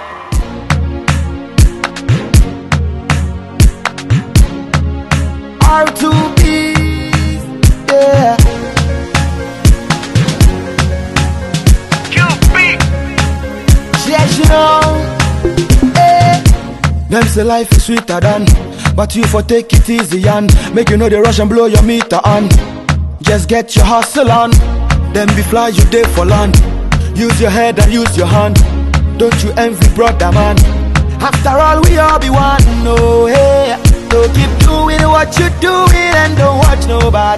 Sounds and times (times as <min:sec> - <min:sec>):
Music: 0:00.0 - 0:37.3.